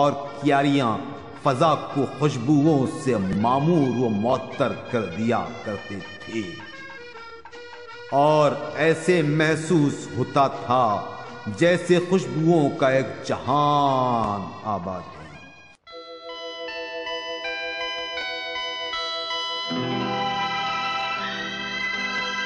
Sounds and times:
Speech: 0:00.0 - 0:06.7, 0:08.1 - 0:15.5
Music: 0:00.0 - 0:22.4.

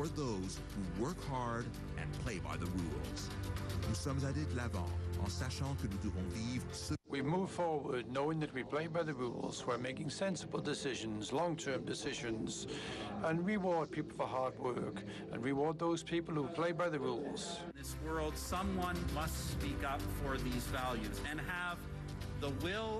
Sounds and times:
Male speech, man speaking: 0:00.0 - 0:22.9
Music: 0:00.0 - 0:22.9
Narration, monologue: 0:00.0 - 0:22.9.

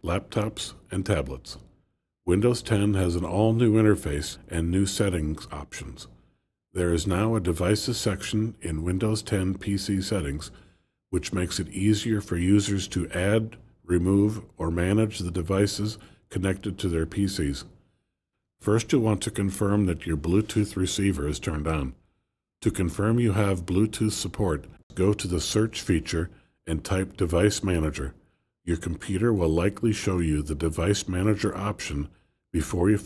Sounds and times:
Speech: 0:00.0 - 0:01.7, 0:02.3 - 0:06.2, 0:06.8 - 0:17.8, 0:18.6 - 0:22.0, 0:22.6 - 0:33.0.

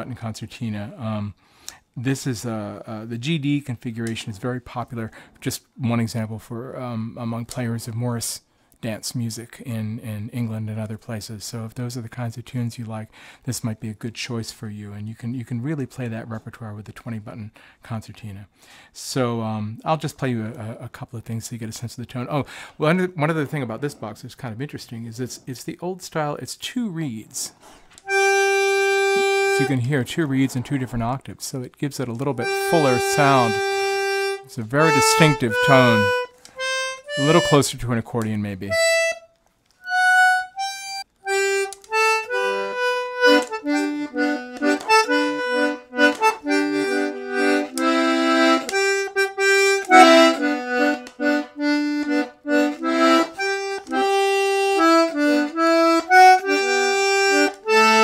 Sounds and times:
Accordion: 0:28.0 - 0:30.0, 0:32.4 - 0:37.8, 0:38.7 - 0:58.0.

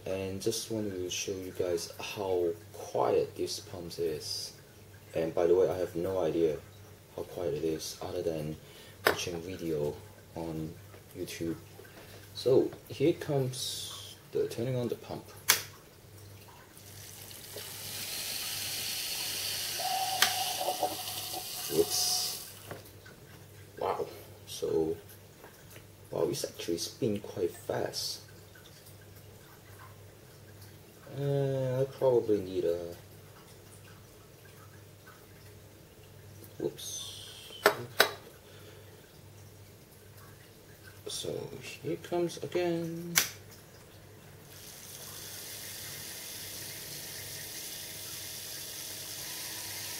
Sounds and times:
Speech: 0:00.0 - 0:11.6, 0:12.4 - 0:15.3, 0:21.6 - 0:22.4, 0:23.8 - 0:25.0, 0:26.1 - 0:28.3, 0:31.1 - 0:33.0, 0:36.5 - 0:38.0, 0:41.0 - 0:43.2.

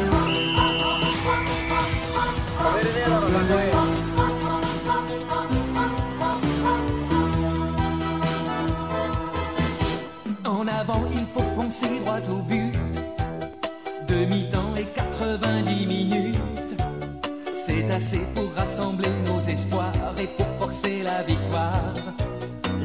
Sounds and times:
Music: 0:00.0 - 0:22.8.

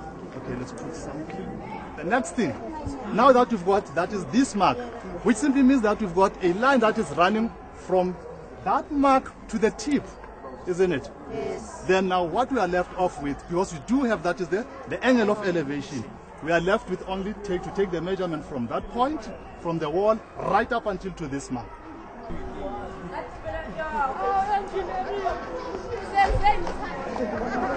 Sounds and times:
Chatter: 0:00.0 - 0:27.7
Outside, urban or manmade: 0:00.0 - 0:27.7.

